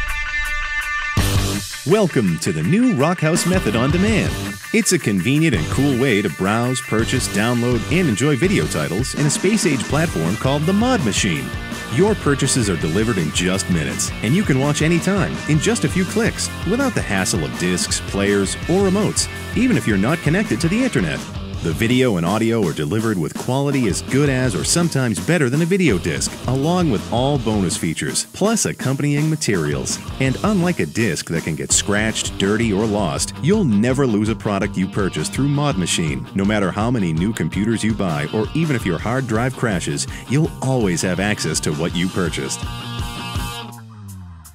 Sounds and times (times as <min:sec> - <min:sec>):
Speech: 0:01.9 - 0:42.7.